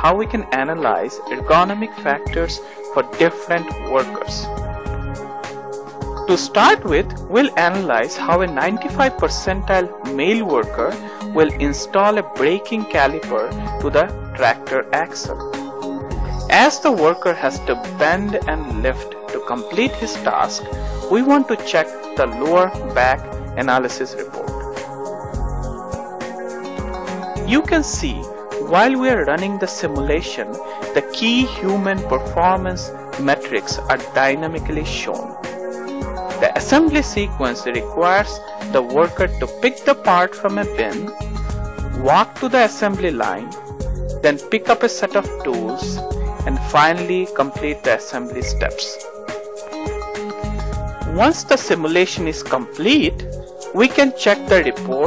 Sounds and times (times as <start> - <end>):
Speech: 0.0 - 4.5, 6.3 - 15.4, 16.5 - 24.6, 27.5 - 35.3, 36.4 - 41.1, 42.0 - 43.5, 44.2 - 49.0, 51.1 - 55.0
Music: 0.0 - 55.0.